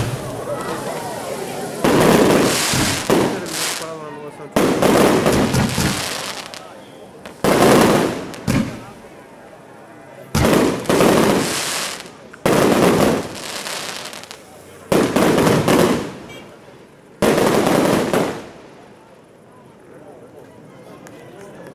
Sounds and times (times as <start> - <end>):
Speech: 0.2 - 2.3, 3.1 - 4.9, 5.9 - 7.4, 8.5 - 10.4, 14.3 - 15.1, 18.9 - 21.7.